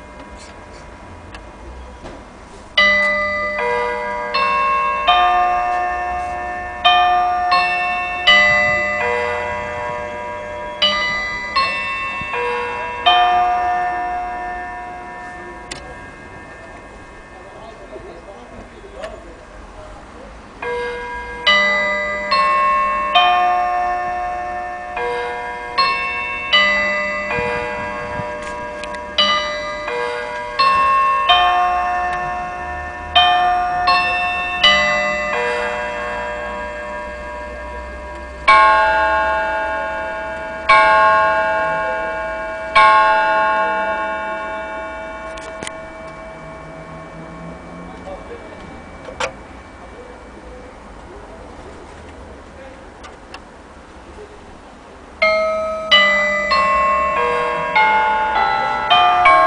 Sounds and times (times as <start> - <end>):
Speech: 17.3 - 20.4, 47.9 - 49.2, 49.9 - 53.0.